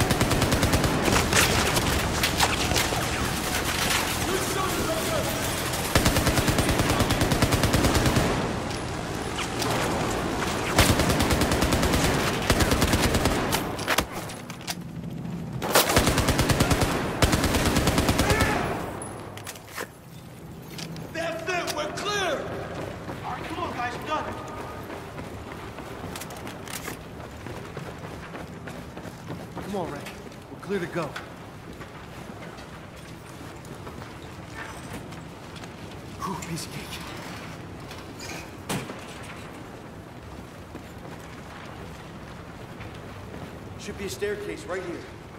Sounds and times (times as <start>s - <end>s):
Fusillade: 0.0s - 8.7s, 10.4s - 14.2s, 15.6s - 19.0s.